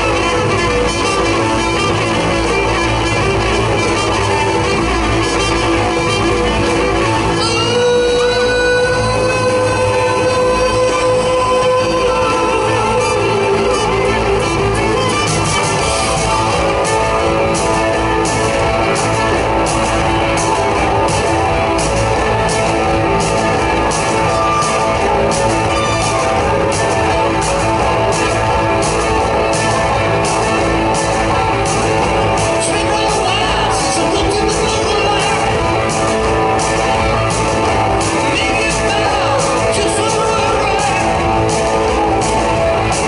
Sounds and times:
Rock and roll: 0.0 - 43.0.

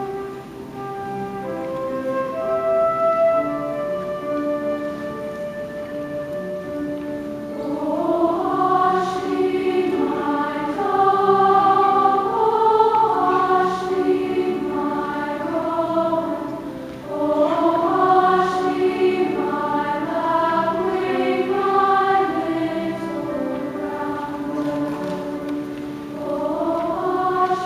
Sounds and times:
Music: 0.0 - 27.6.

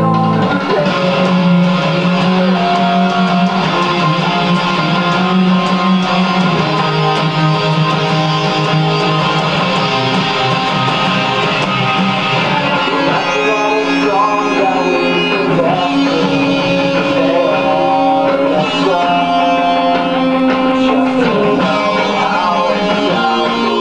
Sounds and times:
Acoustic guitar: 0.0 - 23.8
Electric guitar: 0.0 - 23.8.

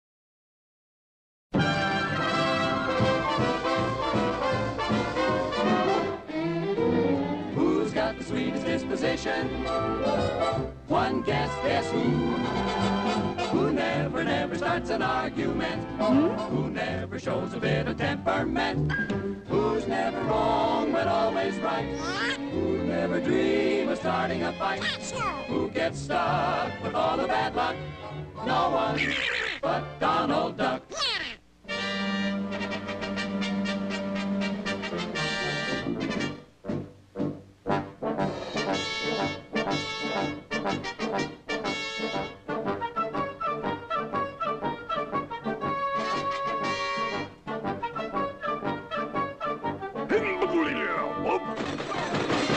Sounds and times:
Music: 1.5 - 30.8, 31.6 - 52.5.

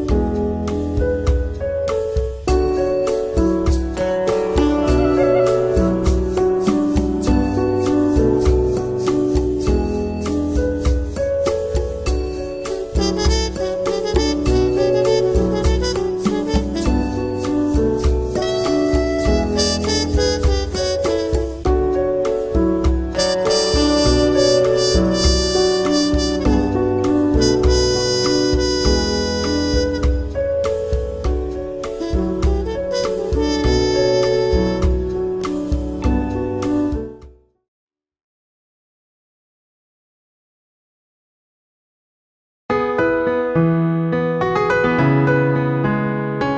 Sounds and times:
Music: 0.0 - 37.6, 42.7 - 46.5.

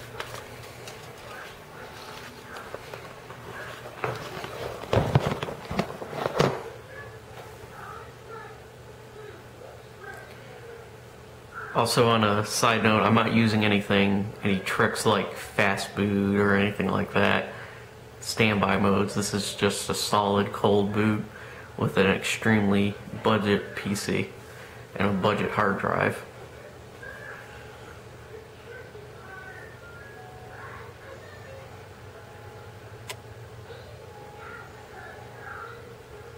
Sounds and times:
Television: 0.0 - 36.3
Speech: 11.7 - 17.6, 18.2 - 24.4, 25.0 - 26.3.

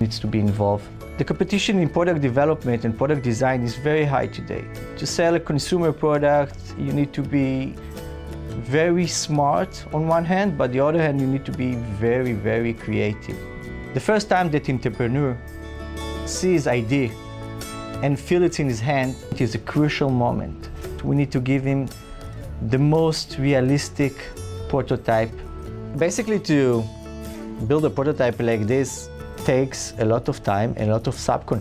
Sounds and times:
Speech: 0.0 - 7.8, 8.6 - 13.4, 14.0 - 15.4, 16.3 - 17.2, 18.0 - 21.9, 22.6 - 26.9, 27.6 - 31.6
Music: 0.0 - 31.6.

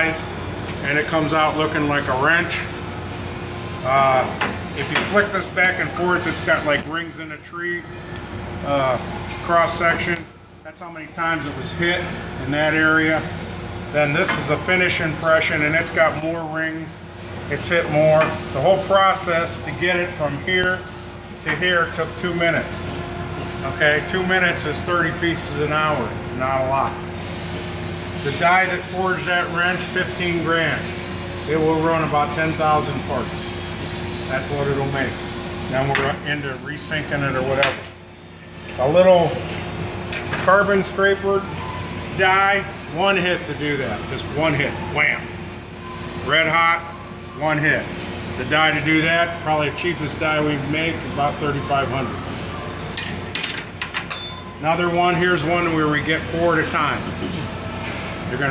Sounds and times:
Speech: 3.8 - 7.9, 8.7 - 13.3, 14.0 - 20.8, 23.6 - 27.0, 28.2 - 30.9, 31.5 - 33.5, 34.3 - 37.8, 42.2 - 45.3, 46.2 - 52.2, 54.6 - 57.1.

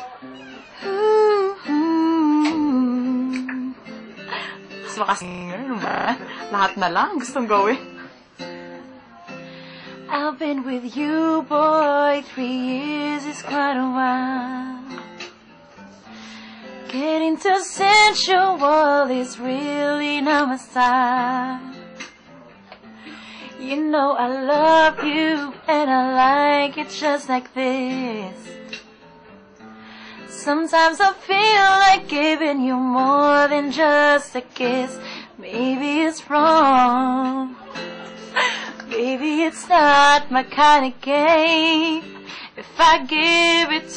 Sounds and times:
Female singing: 0.0 - 3.9, 4.8 - 7.9, 10.1 - 15.0, 16.8 - 21.8, 23.6 - 28.7, 30.3 - 43.9
Music: 0.0 - 43.9.

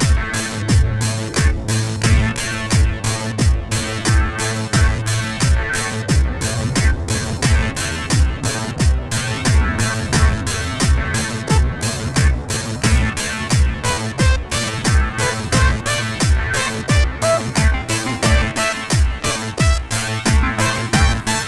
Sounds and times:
Music: 0.0 - 21.4.

